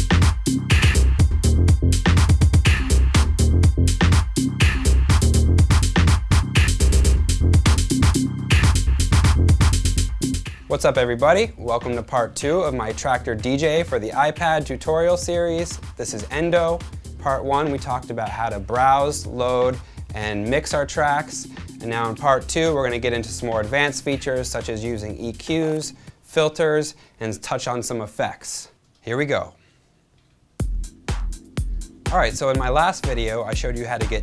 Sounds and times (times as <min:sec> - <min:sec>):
Music: 0:00.0 - 0:26.2, 0:30.6 - 0:34.2
Speech: 0:10.7 - 0:29.6, 0:32.1 - 0:34.2.